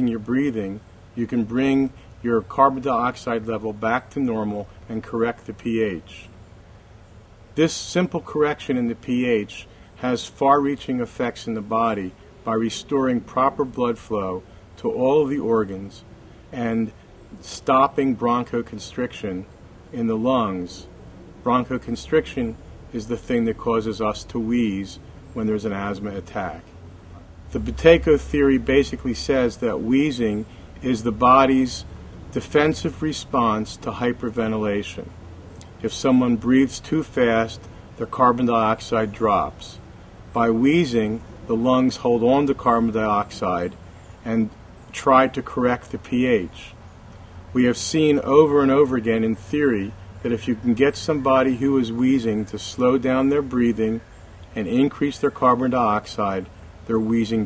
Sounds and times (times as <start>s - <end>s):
Speech: 0.0s - 6.4s, 7.6s - 26.7s, 27.5s - 35.1s, 35.8s - 39.8s, 40.4s - 46.8s, 47.6s - 57.4s.